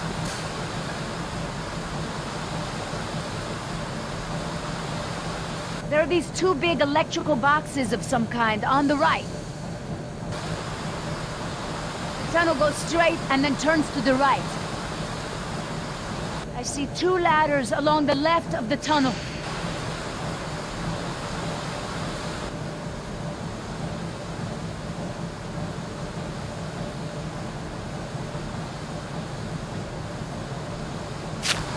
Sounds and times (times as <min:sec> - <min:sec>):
Speech: 0:05.9 - 0:09.3, 0:12.2 - 0:14.6, 0:16.6 - 0:19.2.